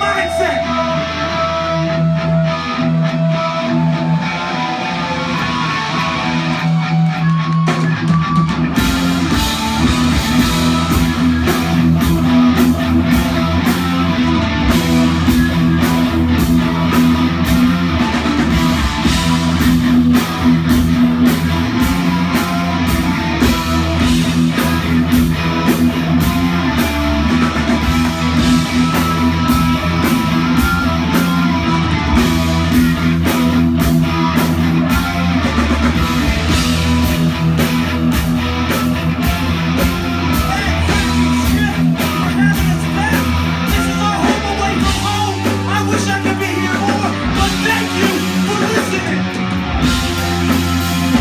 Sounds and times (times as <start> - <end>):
Music: 0.0 - 51.2.